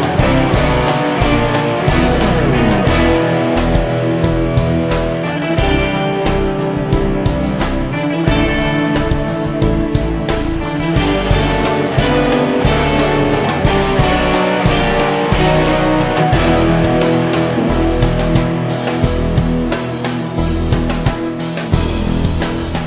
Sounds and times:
Progressive rock: 0:00.0 - 0:22.8.

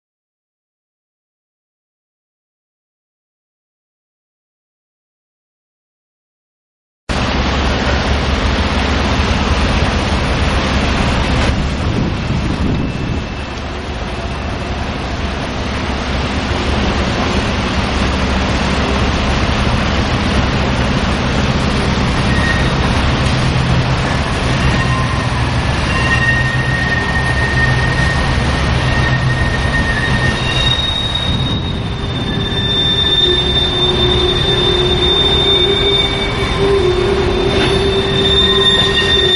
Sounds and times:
Outside, rural or natural: 0:07.1 - 0:39.3
Railroad car, train wagon: 0:07.1 - 0:39.3
Train: 0:07.1 - 0:39.3.

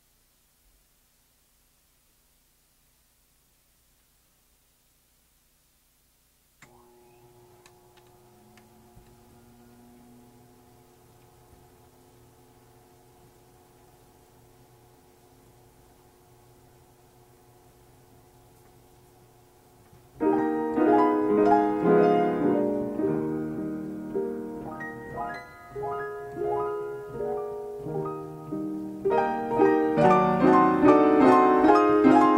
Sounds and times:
New-age music: 0:20.2 - 0:32.3.

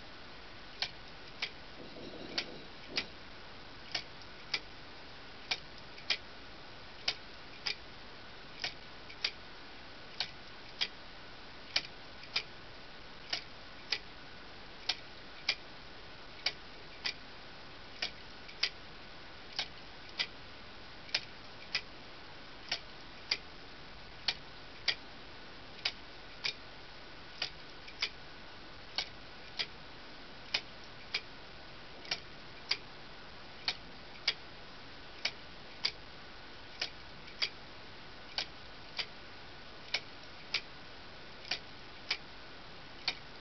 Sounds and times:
Tick-tock: 0:03.9 - 0:04.7, 0:07.1 - 0:07.8, 0:08.6 - 0:09.4, 0:10.2 - 0:11.0, 0:11.7 - 0:12.5, 0:13.3 - 0:14.1, 0:18.0 - 0:18.8, 0:19.6 - 0:20.4, 0:21.1 - 0:21.9, 0:22.6 - 0:23.5, 0:24.2 - 0:25.0, 0:27.4 - 0:28.2, 0:29.0 - 0:29.8, 0:32.0 - 0:32.9, 0:35.2 - 0:36.0, 0:36.7 - 0:37.6, 0:38.3 - 0:39.2, 0:39.9 - 0:40.7, 0:41.4 - 0:42.3, 0:43.0 - 0:43.3.

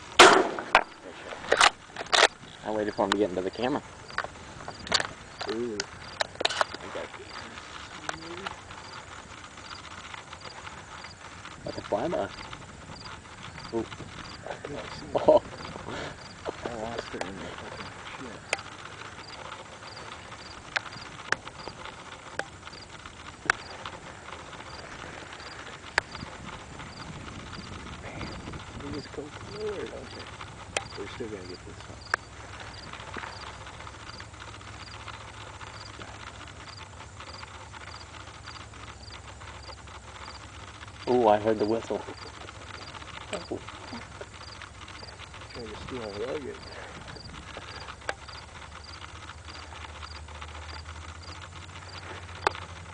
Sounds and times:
Speech: 0:02.6 - 0:03.8, 0:05.5 - 0:05.9, 0:11.7 - 0:12.3, 0:16.5 - 0:18.4, 0:28.8 - 0:30.2, 0:31.0 - 0:31.8, 0:41.1 - 0:42.2, 0:45.6 - 0:46.8.

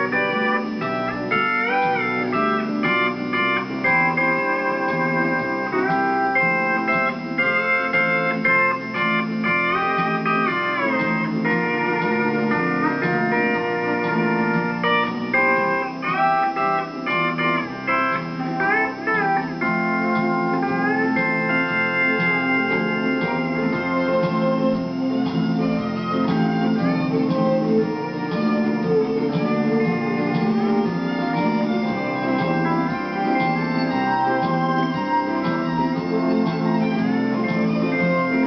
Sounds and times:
Keyboard (musical): 0:00.0 - 0:38.4
Steel guitar, slide guitar: 0:00.0 - 0:38.4.

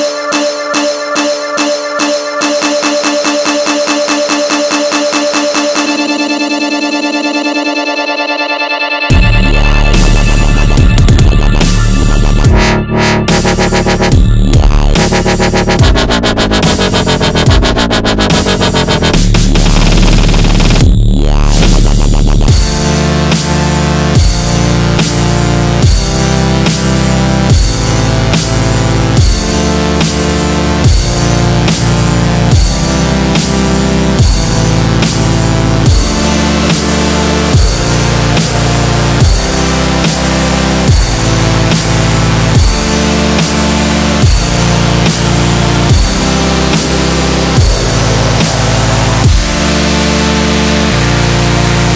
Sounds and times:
Dubstep: 0:00.0 - 0:51.9.

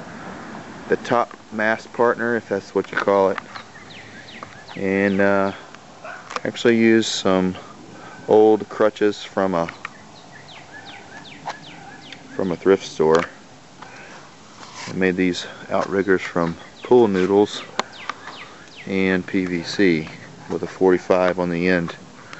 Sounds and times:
Speech: 0:00.9 - 0:03.4, 0:04.8 - 0:05.6, 0:06.4 - 0:07.7, 0:08.3 - 0:09.8, 0:12.4 - 0:13.4, 0:14.9 - 0:17.7, 0:18.8 - 0:22.0
Bird: 0:03.4 - 0:06.7, 0:09.6 - 0:14.3, 0:15.3 - 0:20.7.

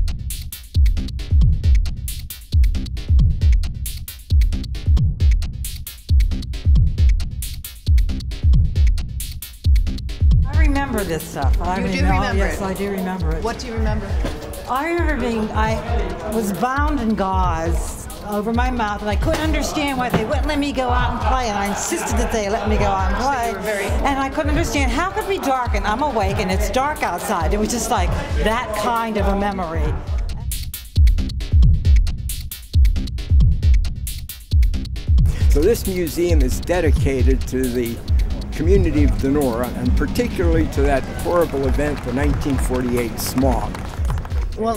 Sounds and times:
Music: 0:00.0 - 0:44.7
Female speech, woman speaking: 0:10.5 - 0:30.0, 0:44.6 - 0:44.7.

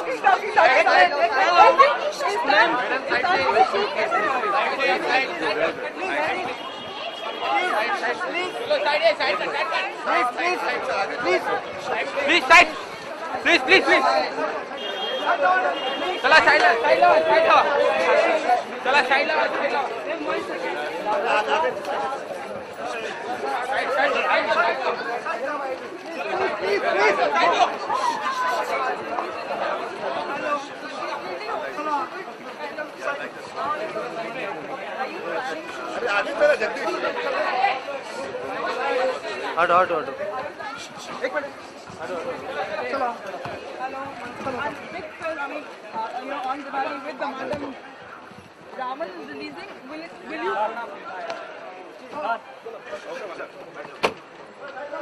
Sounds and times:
Speech: 0:00.0 - 0:55.0.

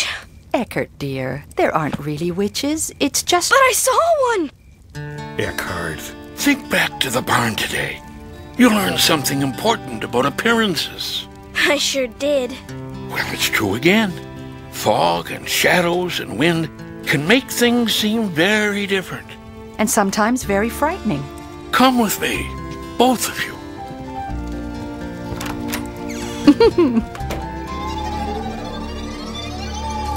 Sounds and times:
Speech: 0:00.6 - 0:04.5, 0:05.4 - 0:08.0, 0:08.6 - 0:14.2, 0:14.8 - 0:19.2, 0:19.8 - 0:23.6
Music: 0:04.8 - 0:30.1.

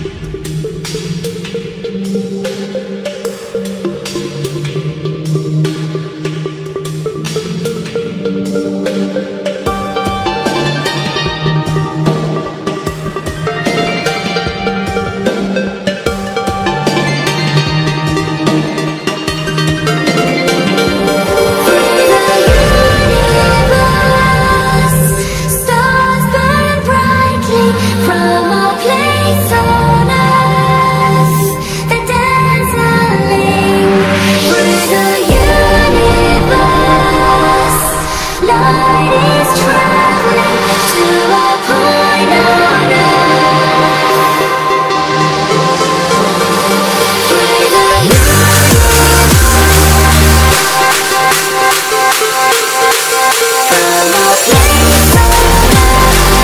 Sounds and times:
Electronic music: 0:00.0 - 0:56.4.

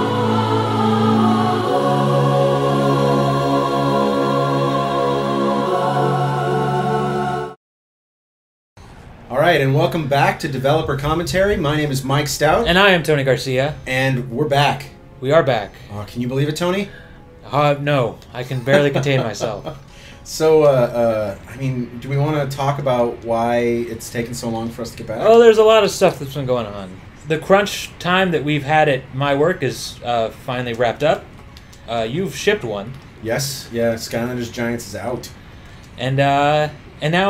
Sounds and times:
Speech: 0:09.3 - 0:16.9, 0:17.5 - 0:31.3, 0:31.9 - 0:35.4, 0:36.0 - 0:37.3.

